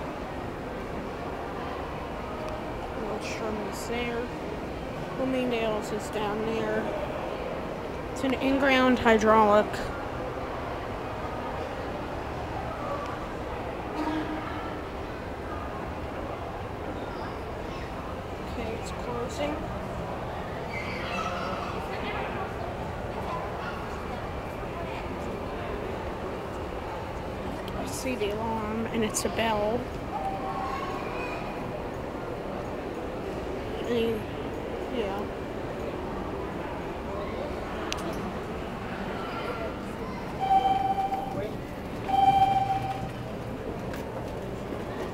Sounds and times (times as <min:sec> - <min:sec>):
Speech: 0:08.2 - 0:10.0.